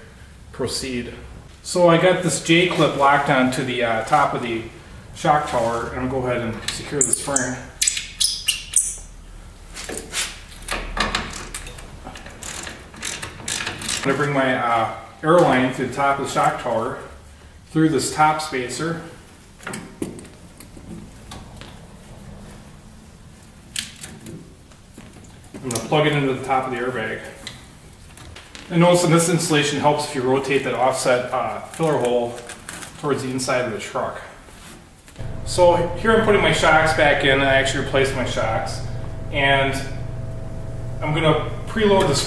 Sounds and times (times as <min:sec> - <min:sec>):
Speech: 0:00.0 - 0:07.8, 0:14.1 - 0:19.2, 0:25.6 - 0:27.5, 0:28.7 - 0:34.4, 0:35.5 - 0:40.0, 0:41.0 - 0:42.2.